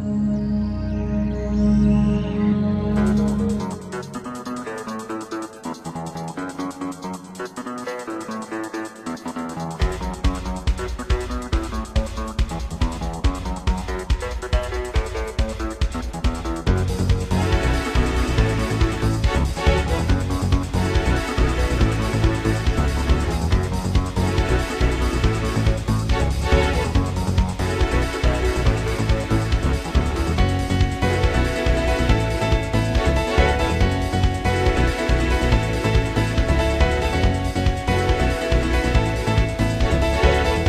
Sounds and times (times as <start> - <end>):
Pop music: 1.6 - 40.6.